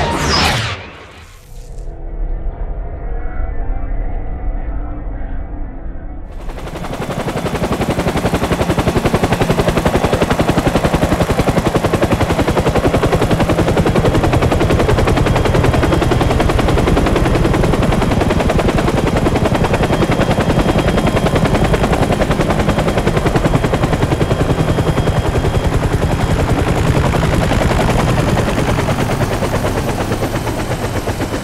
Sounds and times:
Helicopter: 0:06.2 - 0:31.4.

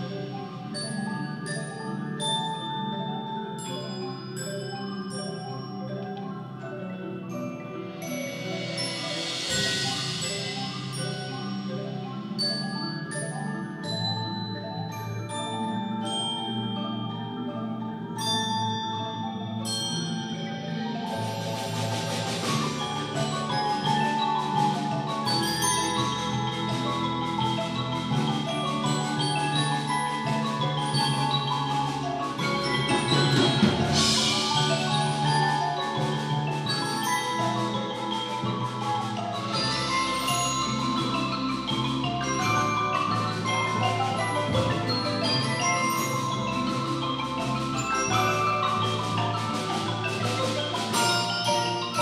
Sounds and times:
Glockenspiel: 0:00.0 - 0:52.0
Marimba, xylophone: 0:00.0 - 0:52.0.

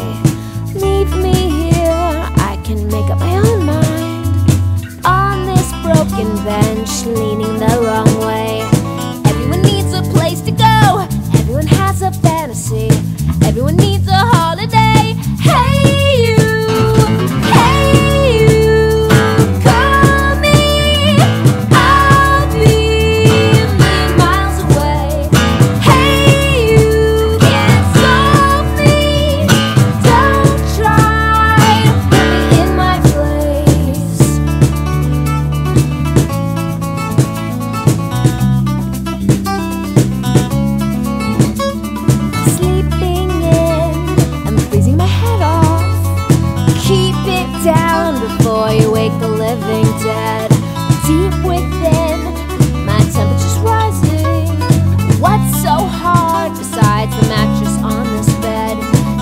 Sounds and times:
Pop music: 0:00.0 - 0:38.0, 0:41.3 - 0:59.2
Rhythm and blues: 0:00.0 - 0:59.2.

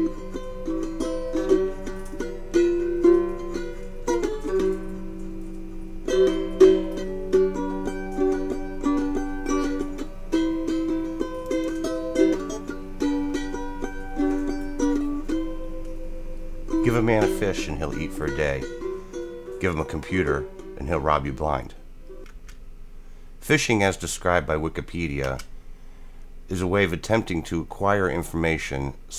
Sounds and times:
Ukulele: 0:00.0 - 0:22.6.

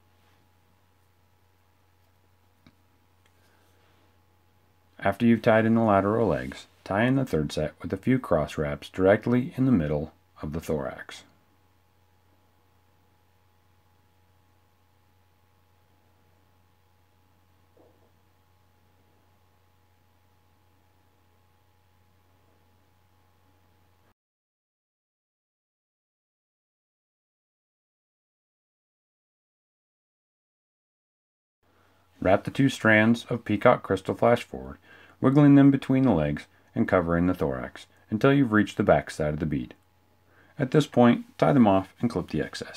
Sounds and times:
Speech: 0:05.0 - 0:11.4, 0:32.2 - 0:39.8, 0:40.5 - 0:42.7.

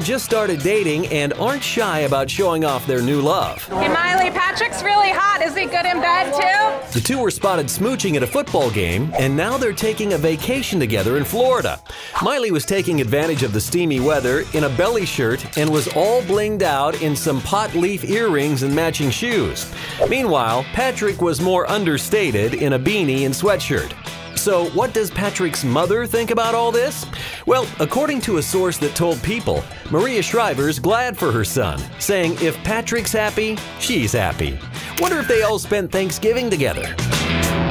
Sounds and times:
Speech: 0:00.0 - 0:37.0
Music: 0:00.0 - 0:37.7.

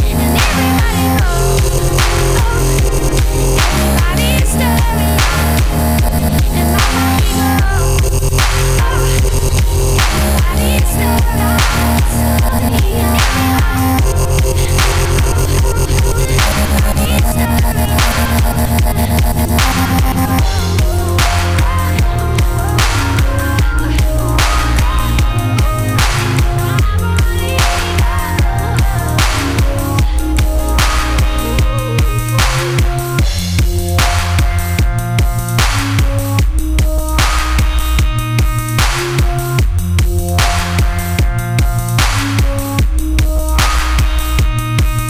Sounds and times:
Drum and bass: 0:00.0 - 0:45.0.

